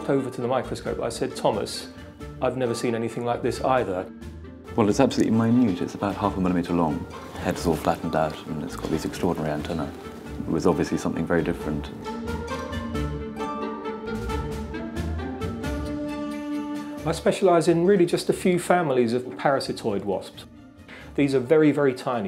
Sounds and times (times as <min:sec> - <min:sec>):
Speech: 0:00.0 - 0:04.1, 0:04.8 - 0:12.0, 0:17.0 - 0:20.5, 0:21.2 - 0:22.2
Music: 0:00.0 - 0:22.2.